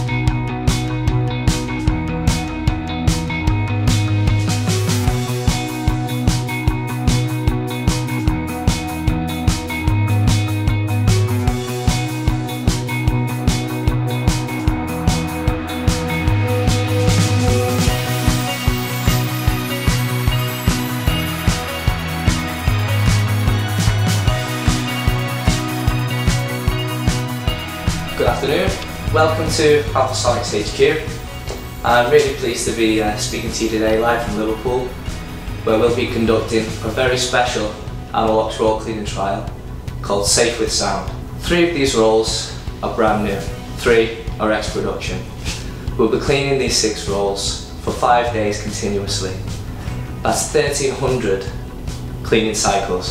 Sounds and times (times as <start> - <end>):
Music: 0.0 - 53.1.